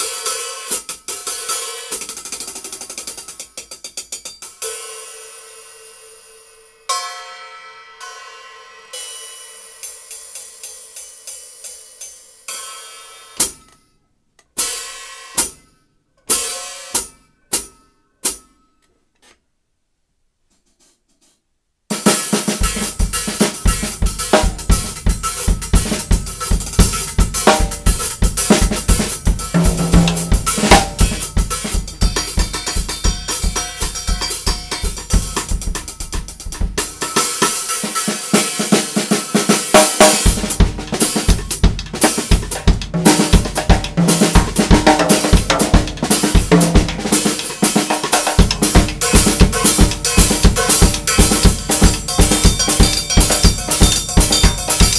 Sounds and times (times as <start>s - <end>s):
Drum kit: 0.0s - 7.2s, 14.5s - 15.7s, 16.3s - 18.5s, 21.9s - 54.9s
Bass drum: 22.6s - 37.0s, 40.3s - 54.9s.